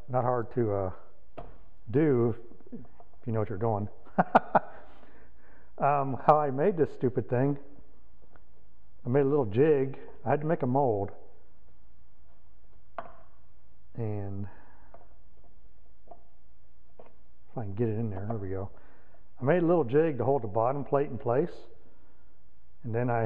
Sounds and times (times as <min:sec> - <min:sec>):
Speech: 0:00.0 - 0:01.1, 0:01.9 - 0:02.4, 0:03.2 - 0:03.9, 0:05.8 - 0:07.7, 0:09.1 - 0:11.2, 0:14.0 - 0:14.6, 0:17.6 - 0:18.8, 0:19.4 - 0:21.7, 0:22.8 - 0:23.2.